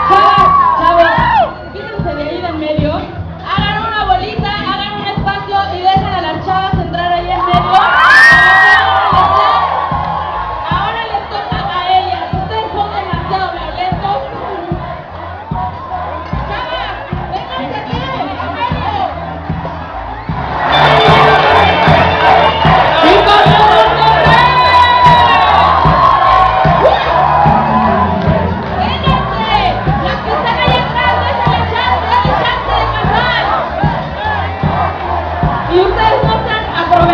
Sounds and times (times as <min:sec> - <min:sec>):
Crowd: 0:00.0 - 0:37.1
Music: 0:00.0 - 0:37.1
Speech: 0:01.8 - 0:07.8, 0:16.5 - 0:19.2, 0:35.8 - 0:37.1.